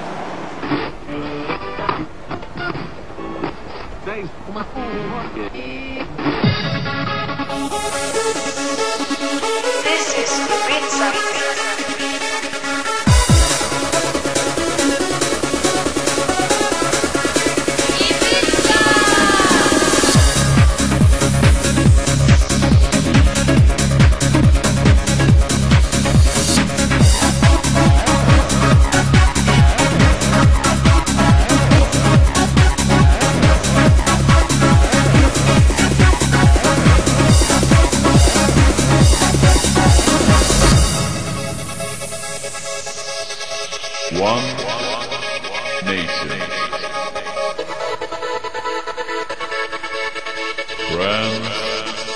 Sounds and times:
Music: 0.7 - 3.6, 5.2 - 52.1.

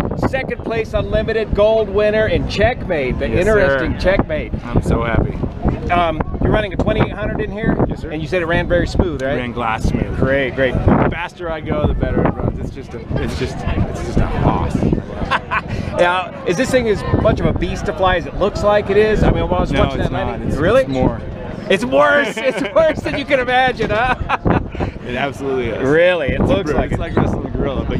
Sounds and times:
Speech: 0.2 - 24.1, 25.0 - 27.9.

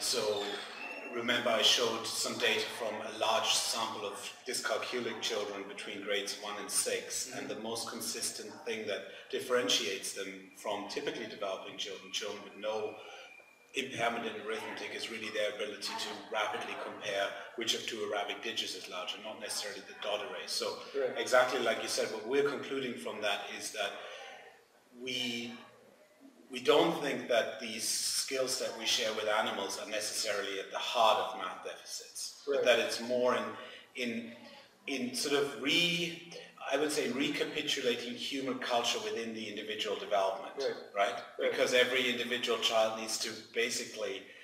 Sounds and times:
Male speech, man speaking: 0.0 - 25.7, 26.5 - 44.3.

